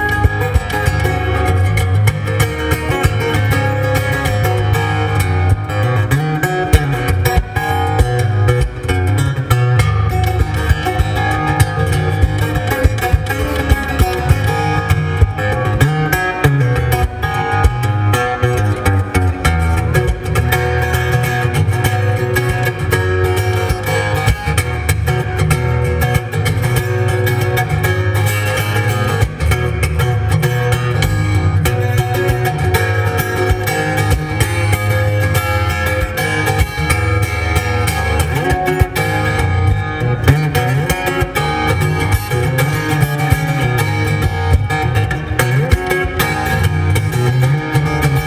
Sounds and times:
Music: 0.0 - 48.2.

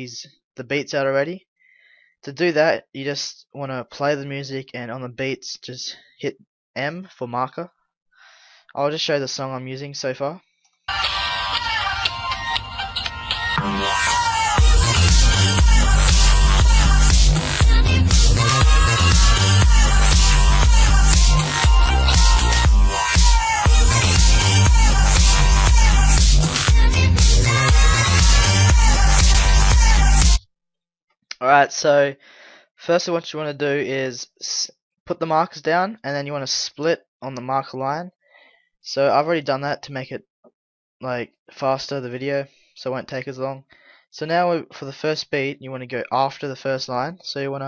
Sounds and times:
Music: 10.9 - 30.4.

